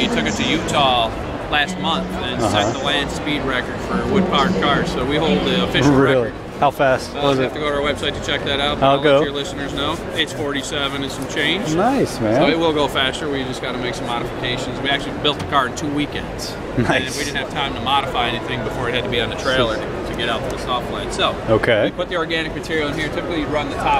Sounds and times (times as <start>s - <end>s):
Speech: 0.0s - 23.9s.